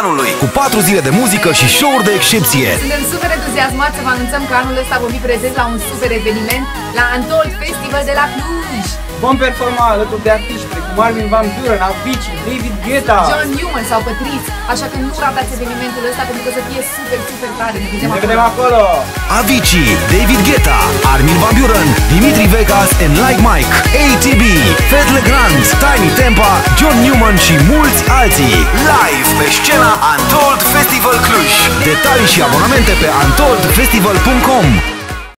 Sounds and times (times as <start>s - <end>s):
Speech: 0.0s - 34.9s
Music: 0.0s - 35.3s.